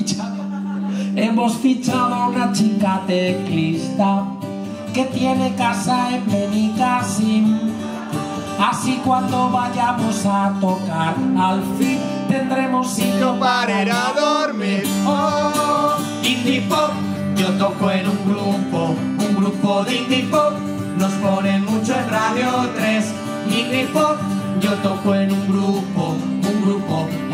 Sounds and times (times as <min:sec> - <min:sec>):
Music: 0:00.0 - 0:27.3.